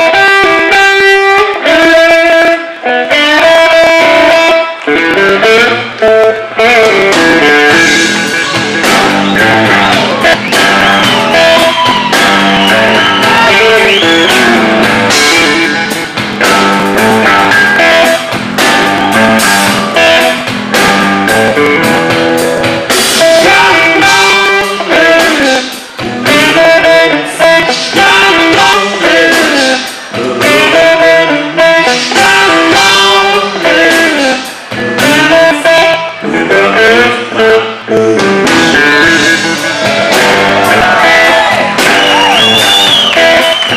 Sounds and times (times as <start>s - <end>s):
Steel guitar, slide guitar: 0.0s - 25.2s, 34.6s - 43.7s.